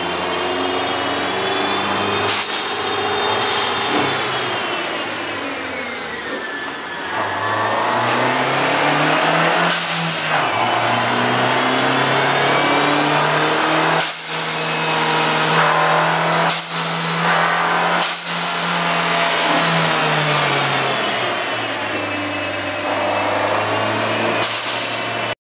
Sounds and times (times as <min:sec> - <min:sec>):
Accelerating, revving, vroom: 0:00.0 - 0:05.0, 0:07.1 - 0:25.4.